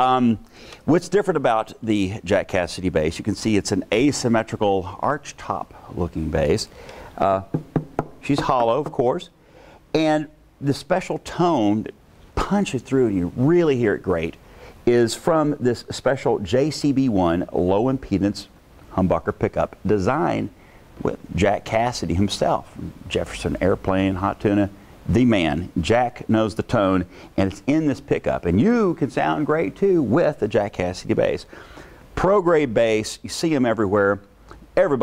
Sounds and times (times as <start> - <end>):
Speech: 0.0 - 7.6, 8.2 - 9.4, 10.0 - 31.5, 32.2 - 35.0.